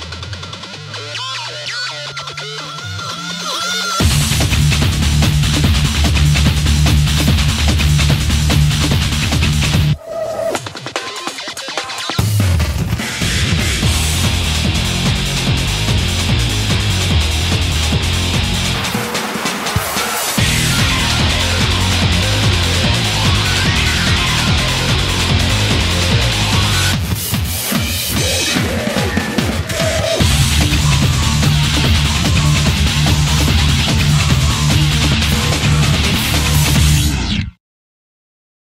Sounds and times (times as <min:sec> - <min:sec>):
Music: 0:00.0 - 0:37.6.